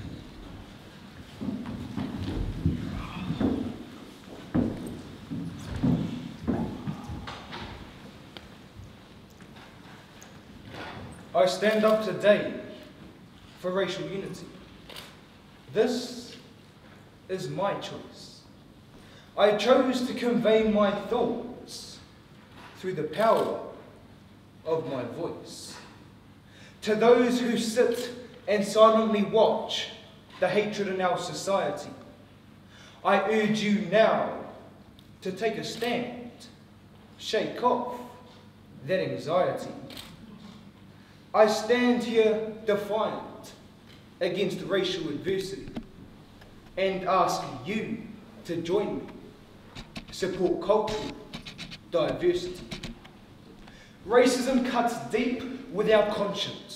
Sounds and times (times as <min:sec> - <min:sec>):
Narration, monologue: 0:09.2 - 0:56.7
Male speech, man speaking: 0:11.4 - 0:12.8, 0:13.6 - 0:14.6, 0:15.7 - 0:16.4, 0:17.3 - 0:18.5, 0:19.4 - 0:22.1, 0:22.8 - 0:23.8, 0:24.7 - 0:25.9, 0:26.8 - 0:32.0, 0:33.1 - 0:34.5, 0:35.2 - 0:36.6, 0:37.2 - 0:38.2, 0:38.8 - 0:39.9, 0:41.4 - 0:43.6, 0:44.2 - 0:45.8, 0:46.8 - 0:49.2, 0:50.1 - 0:51.2, 0:52.0 - 0:52.8, 0:54.1 - 0:56.7.